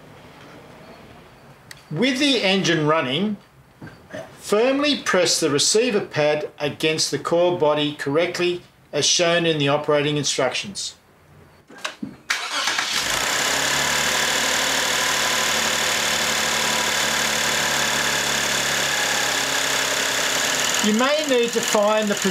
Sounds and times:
Speech: 1.9s - 3.4s, 4.4s - 11.0s, 20.8s - 22.3s.

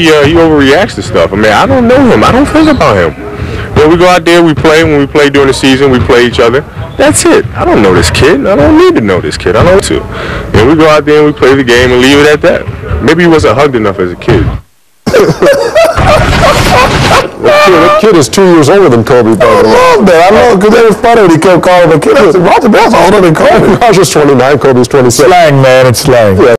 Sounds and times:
Speech: 17.5s - 26.5s.

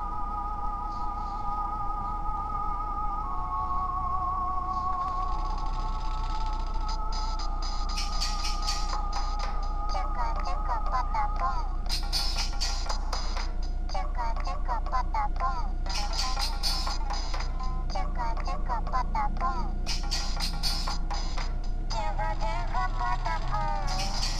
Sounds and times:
Music: 0.0s - 24.4s.

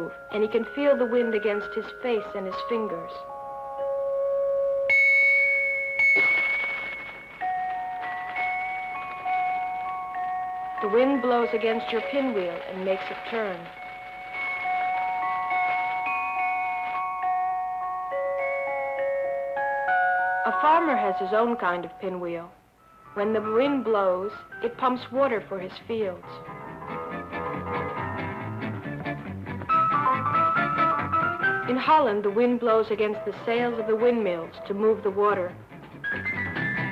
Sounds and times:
Speech: 0.0s - 3.3s, 10.8s - 13.8s, 20.5s - 22.6s, 23.2s - 26.4s, 31.7s - 35.6s
Music: 0.0s - 36.9s.

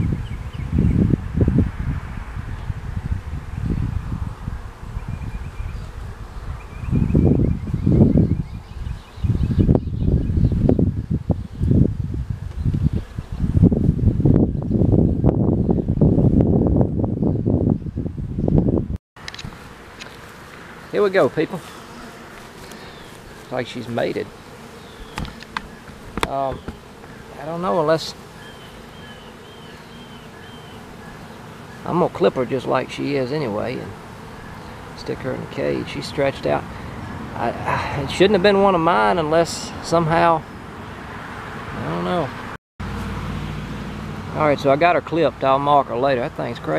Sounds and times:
Outside, rural or natural: 0.0s - 46.7s.

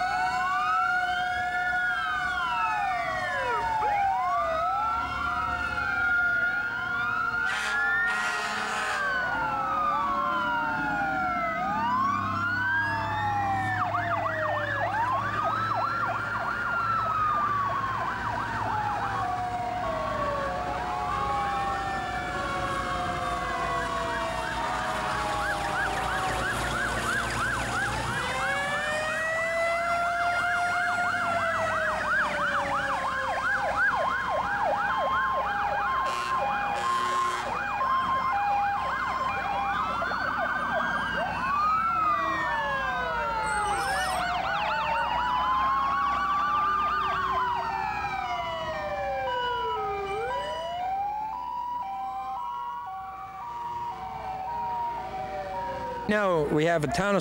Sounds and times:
Fire engine, fire truck (siren): 0.0s - 57.2s.

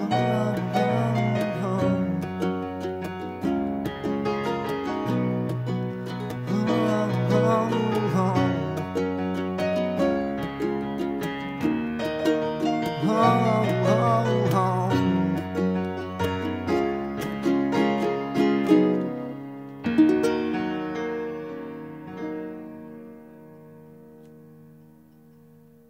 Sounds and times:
Ukulele: 0.0s - 23.1s
Guitar: 0.0s - 25.8s.

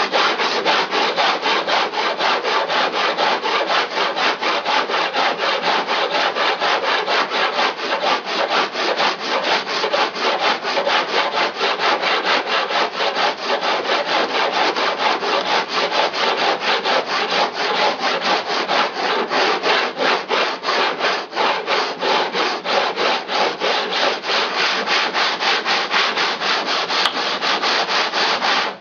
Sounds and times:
Filing (rasp): 0.0s - 28.8s
Rub: 0.0s - 28.8s
Wood: 0.0s - 28.8s.

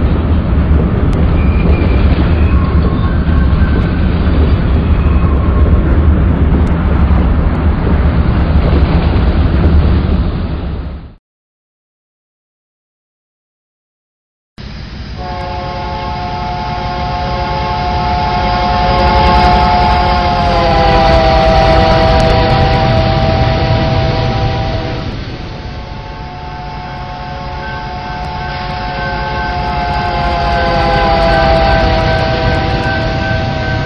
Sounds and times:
Outside, rural or natural: 0.0s - 11.2s, 14.6s - 33.8s
Railroad car, train wagon: 0.0s - 11.2s, 14.6s - 33.8s
Train horn: 15.2s - 33.8s.

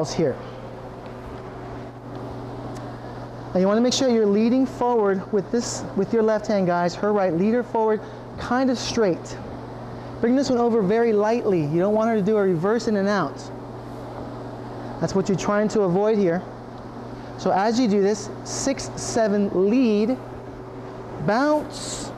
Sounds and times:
Speech: 0.0s - 0.4s, 3.5s - 9.4s, 10.2s - 13.5s, 15.0s - 16.5s, 17.4s - 20.2s, 21.2s - 22.1s.

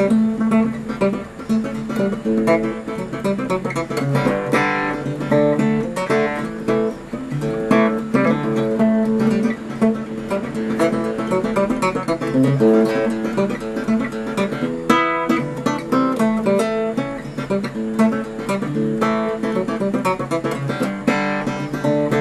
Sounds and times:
Acoustic guitar: 0.0s - 22.2s
Strum: 0.0s - 22.2s.

